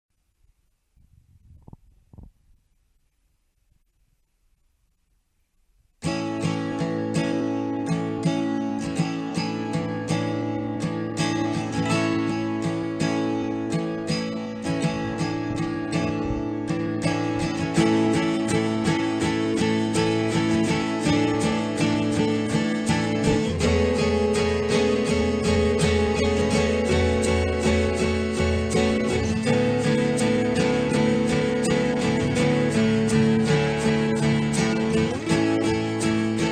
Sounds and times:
Silence: 0.1s - 6.0s
Music: 6.0s - 36.5s.

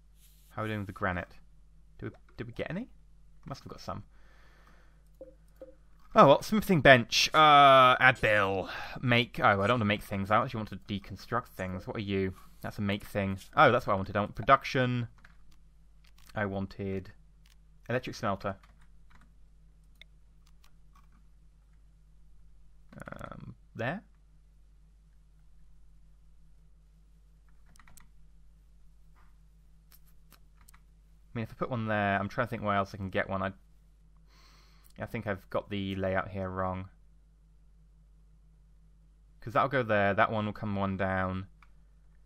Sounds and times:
Speech: 0.6s - 1.4s, 2.0s - 4.1s, 6.2s - 15.1s, 16.3s - 17.2s, 17.9s - 18.6s, 23.0s - 24.1s, 31.4s - 33.6s, 35.0s - 37.0s, 39.4s - 41.5s.

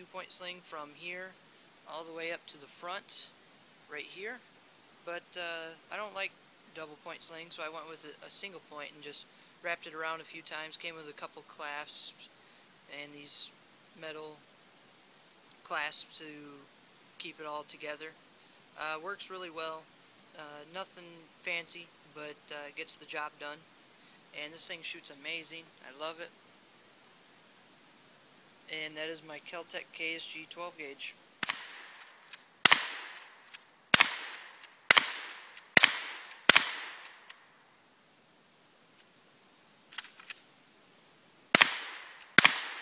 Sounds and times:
Speech: 0.0s - 4.4s, 5.1s - 12.3s, 12.9s - 14.4s, 15.6s - 18.2s, 18.8s - 23.7s, 24.3s - 26.4s, 28.7s - 31.2s
Cap gun: 31.4s - 33.3s, 34.0s - 37.2s, 41.6s - 42.8s.

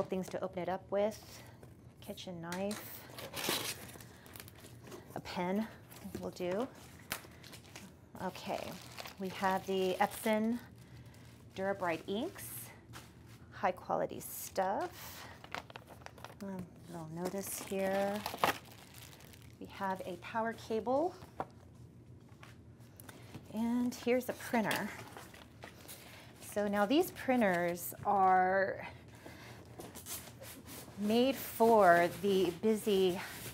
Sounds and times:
Speech: 0.0s - 3.0s, 8.2s - 10.7s, 11.6s - 12.8s, 16.4s - 18.2s, 23.5s - 25.0s, 26.5s - 28.9s, 31.0s - 33.3s.

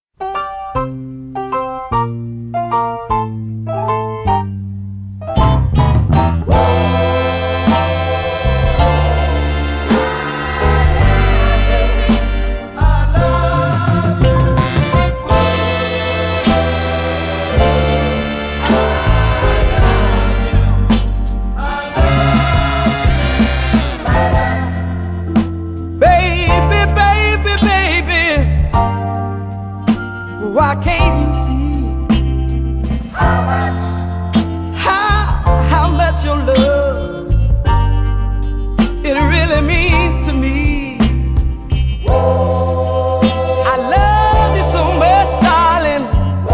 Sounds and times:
Soul music: 0.2s - 46.5s.

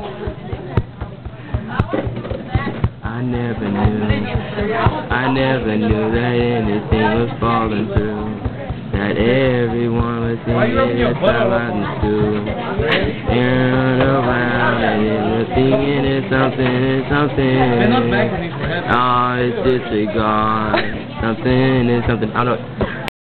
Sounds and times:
Speech: 0.0s - 23.0s.

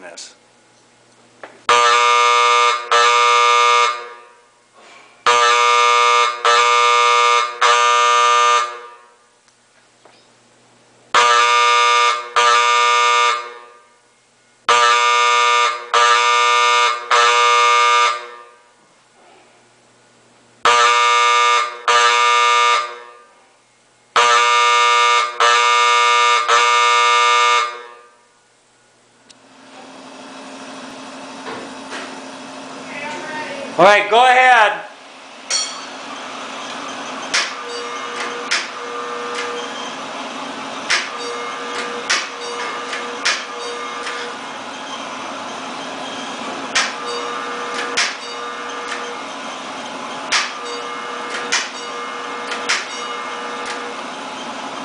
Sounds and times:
Speech: 0.0s - 0.4s, 32.9s - 34.9s
Fire alarm: 1.7s - 4.4s, 5.2s - 9.2s, 11.2s - 14.0s, 14.7s - 18.8s, 20.6s - 23.3s, 24.2s - 28.3s, 37.3s - 40.1s, 41.0s - 44.4s, 46.8s - 49.2s, 50.3s - 54.0s.

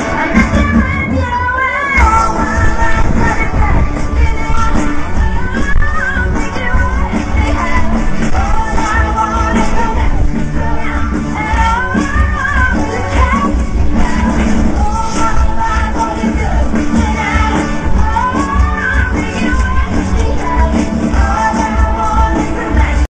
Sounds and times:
Rhythm and blues: 0.0s - 23.0s.

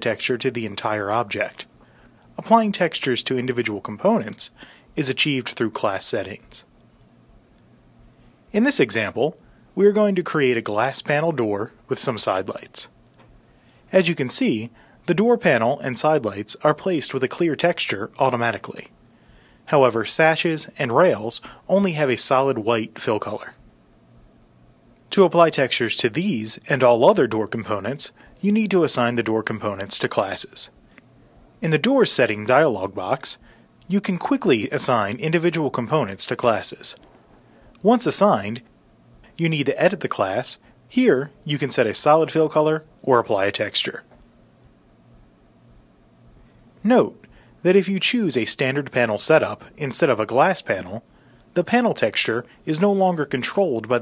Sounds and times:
Speech: 0.0s - 1.7s, 2.4s - 6.7s, 8.5s - 13.0s, 13.9s - 18.9s, 19.7s - 23.6s, 25.1s - 30.8s, 31.6s - 37.0s, 37.8s - 38.7s, 39.4s - 44.2s, 46.8s - 54.0s.

